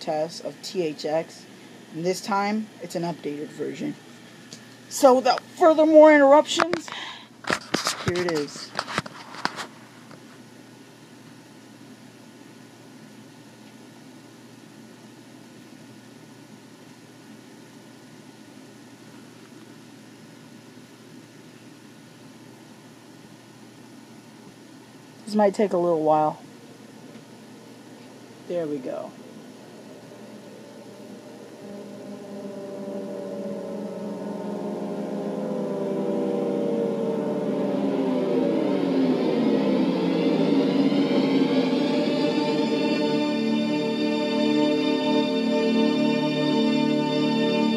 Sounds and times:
Speech: 0:00.0 - 0:04.0, 0:04.9 - 0:06.9, 0:08.0 - 0:08.7, 0:25.2 - 0:26.4, 0:28.5 - 0:29.2.

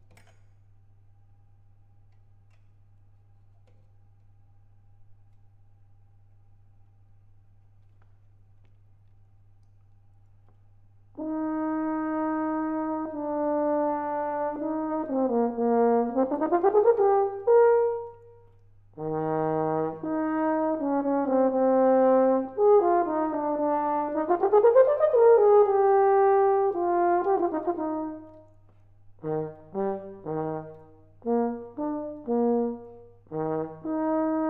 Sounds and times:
Trombone: 0:11.2 - 0:28.5, 0:29.2 - 0:34.5.

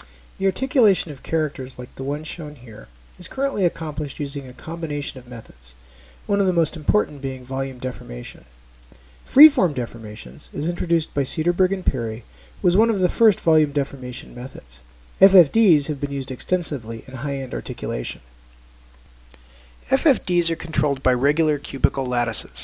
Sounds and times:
Speech: 0:00.4 - 0:08.5, 0:09.3 - 0:18.3, 0:19.8 - 0:22.6.

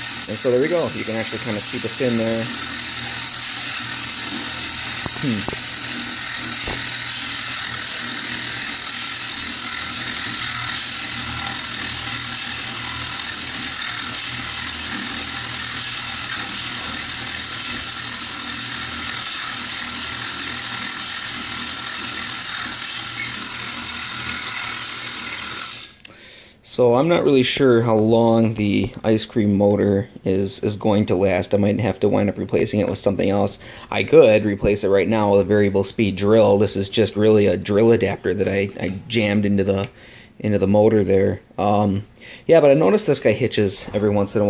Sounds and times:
Tools: 0:02.6 - 0:26.1.

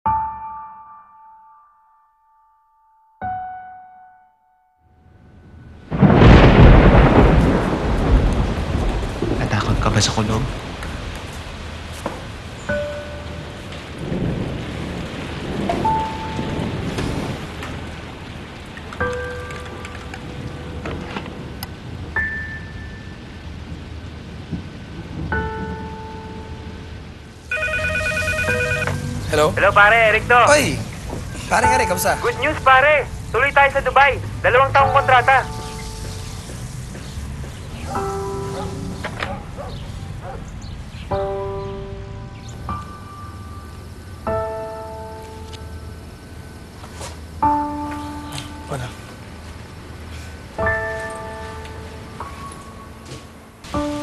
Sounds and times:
Rain on surface: 0:05.3 - 0:54.0
Thunder: 0:05.5 - 0:32.4.

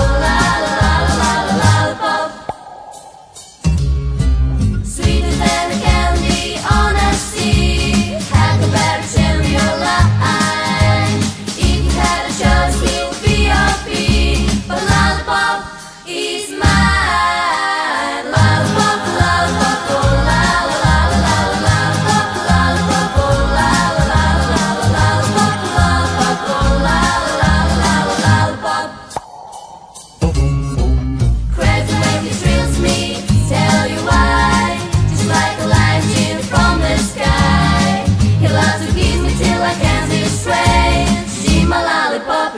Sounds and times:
Music: 0:00.0 - 0:29.2, 0:30.0 - 0:42.5.

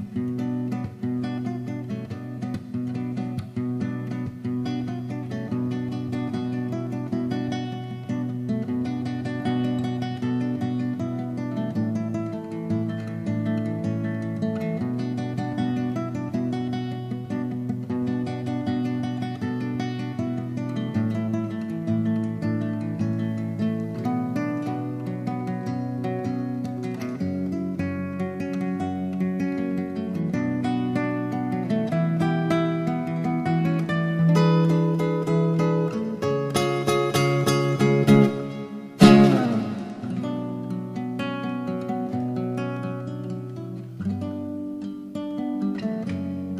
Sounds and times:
Acoustic guitar: 0:00.0 - 0:46.5.

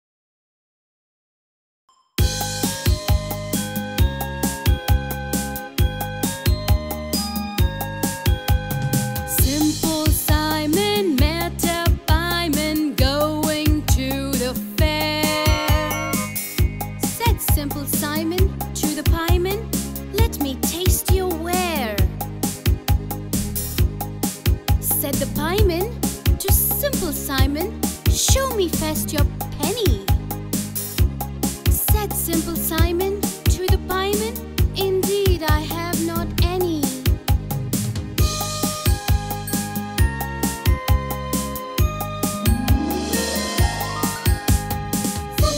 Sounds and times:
Music: 0:01.9 - 0:45.5
Speech: 0:17.0 - 0:22.1, 0:24.8 - 0:30.1, 0:31.7 - 0:37.1, 0:45.4 - 0:45.5.

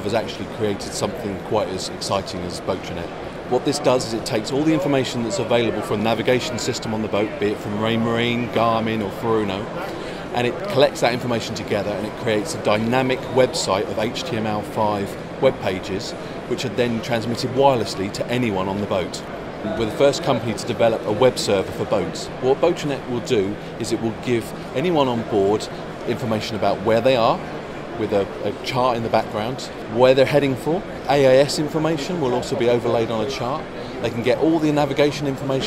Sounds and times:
Speech: 0:00.0 - 0:27.4, 0:28.0 - 0:35.6.

